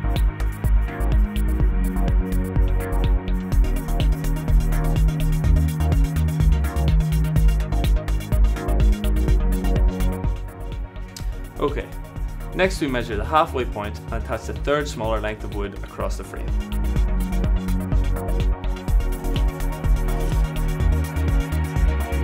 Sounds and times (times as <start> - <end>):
Music: 0.0 - 22.2.